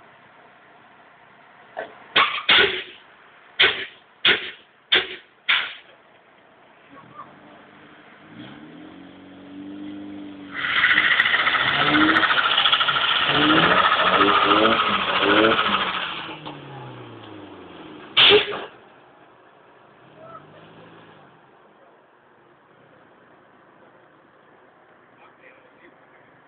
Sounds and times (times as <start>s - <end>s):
Outside, urban or manmade: 0.0s - 26.4s
Truck: 0.0s - 26.4s
Race car, auto racing: 6.8s - 26.4s.